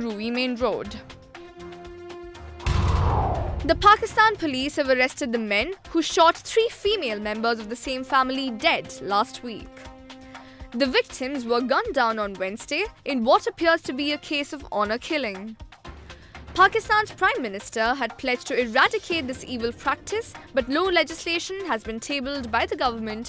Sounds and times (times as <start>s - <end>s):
Speech: 0.0s - 1.0s, 3.7s - 9.8s, 10.8s - 15.6s, 16.6s - 23.2s
Music: 0.0s - 23.2s.